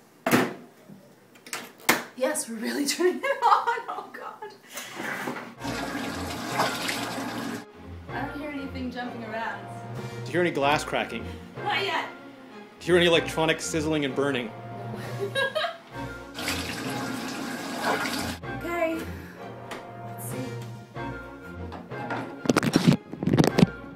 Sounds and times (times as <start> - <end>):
Music: 5.6 - 23.9.